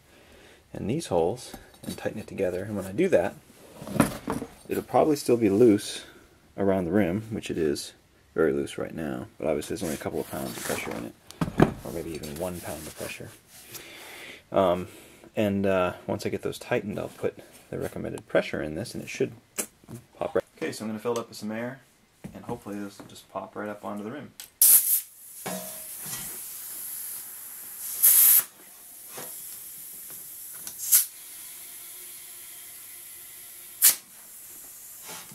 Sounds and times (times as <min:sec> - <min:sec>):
Speech: 0:00.7 - 0:03.4, 0:04.7 - 0:11.2, 0:11.8 - 0:13.4, 0:14.5 - 0:19.4, 0:20.2 - 0:24.4.